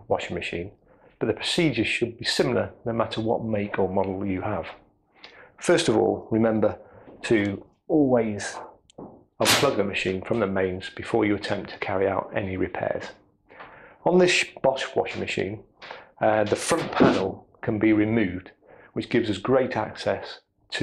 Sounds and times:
Speech: 0.0 - 4.8, 5.6 - 8.8, 9.4 - 13.2, 14.0 - 20.8.

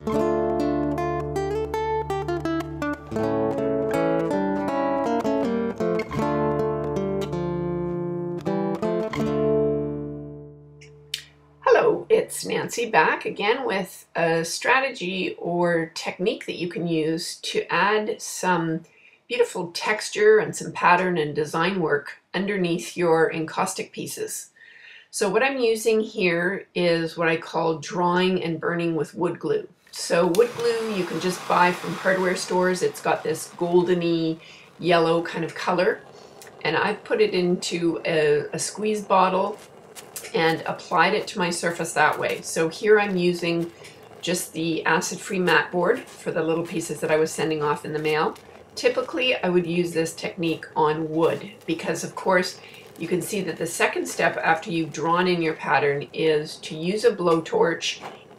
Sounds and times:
Speech: 11.6 - 24.5, 25.2 - 36.0, 36.6 - 39.6, 40.2 - 58.0.

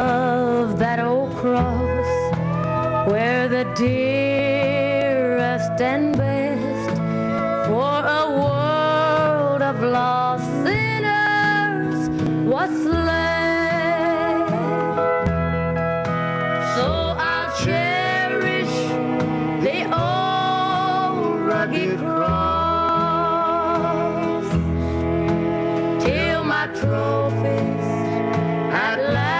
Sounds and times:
Music: 0.0 - 29.4
Singing: 16.7 - 19.0, 19.6 - 24.2, 26.0 - 29.4.

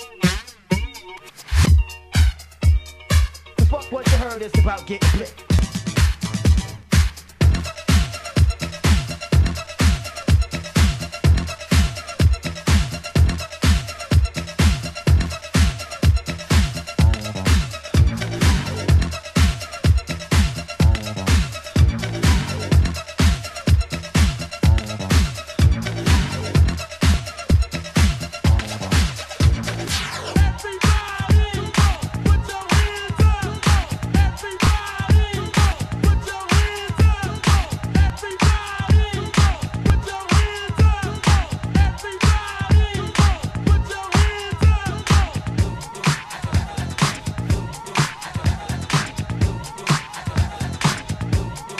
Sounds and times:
Disco: 0.0 - 51.7
Funk: 0.0 - 51.7.

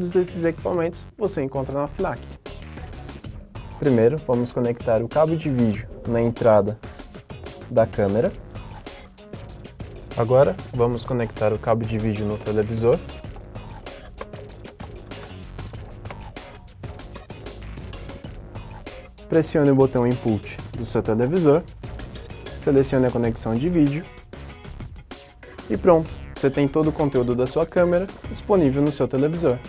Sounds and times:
Speech: 0.0 - 2.2, 3.8 - 6.8, 7.7 - 8.4, 10.2 - 13.1, 19.3 - 21.7, 22.6 - 24.1, 25.7 - 29.6
Music: 0.0 - 29.6.

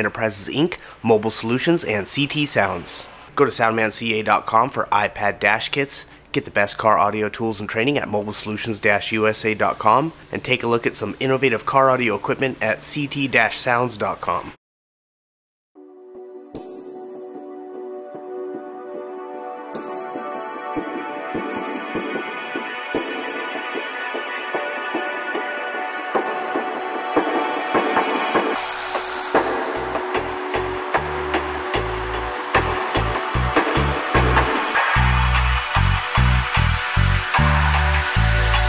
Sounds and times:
Music: 15.8 - 38.6.

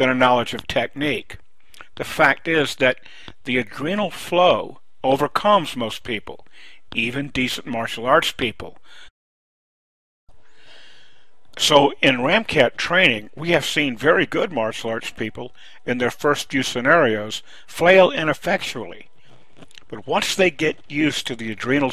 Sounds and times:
Speech: 0.0 - 8.8, 11.6 - 19.1, 19.8 - 21.9.

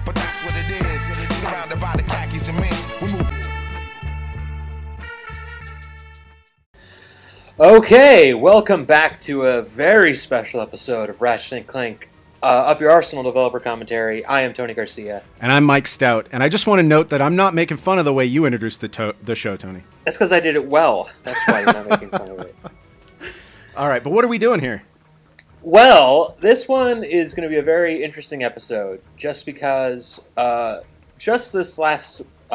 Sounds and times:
Music: 0.0 - 32.5
Speech: 7.6 - 22.5, 23.8 - 24.9, 25.6 - 32.5.

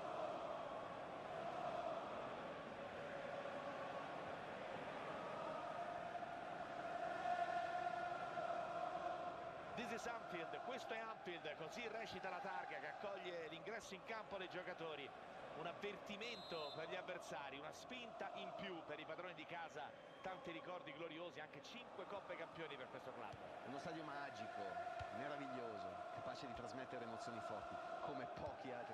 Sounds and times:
Speech: 9.8 - 28.9.

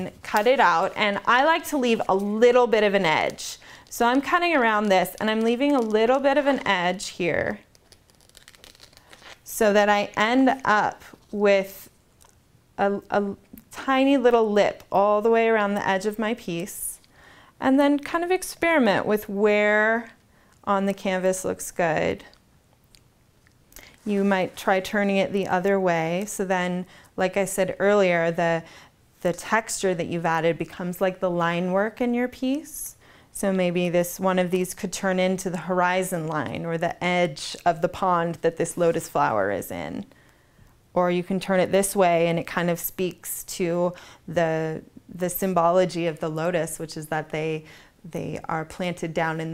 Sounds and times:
Speech: 0.0 - 7.6, 9.5 - 11.9, 12.8 - 17.0, 17.6 - 22.3, 24.0 - 28.6, 29.2 - 40.1, 41.0 - 49.5
Scissors: 7.6 - 9.4.

